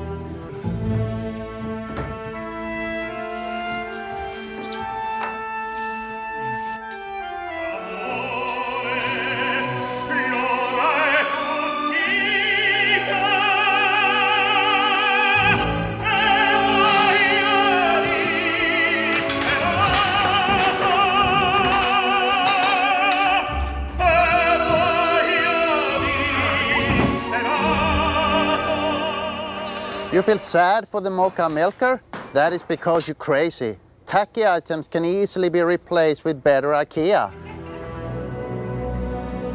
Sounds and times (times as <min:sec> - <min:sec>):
Music: 0:00.0 - 0:30.8, 0:37.0 - 0:39.5
Speech: 0:30.1 - 0:37.3.